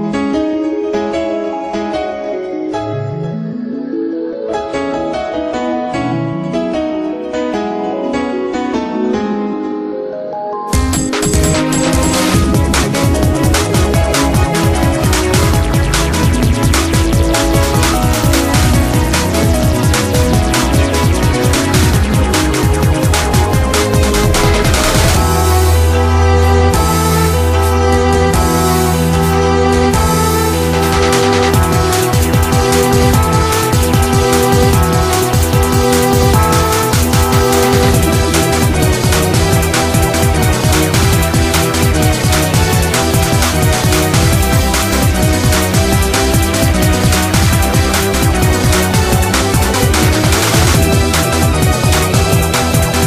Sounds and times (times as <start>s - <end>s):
Music: 0.0s - 53.0s.